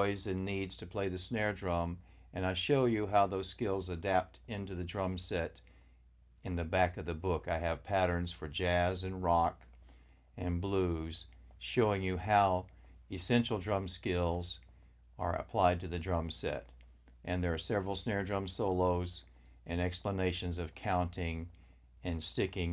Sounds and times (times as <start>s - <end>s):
Speech: 0.0s - 5.7s, 6.4s - 9.7s, 10.4s - 22.7s.